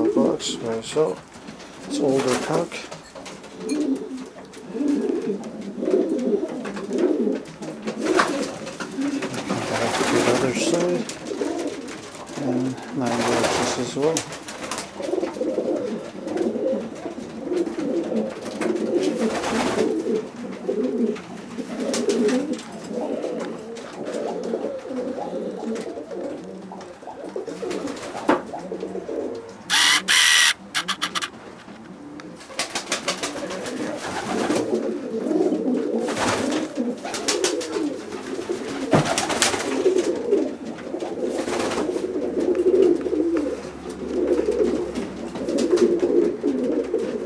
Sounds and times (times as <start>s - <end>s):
Coo: 0.0s - 0.5s, 1.8s - 47.2s
Speech: 0.0s - 1.2s, 1.9s - 3.0s, 9.5s - 11.1s, 12.4s - 14.3s.